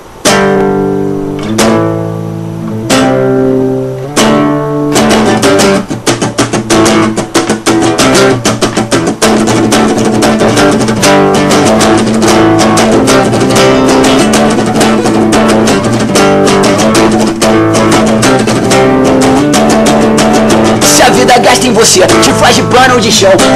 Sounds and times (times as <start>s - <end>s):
Music: 0.0s - 23.5s.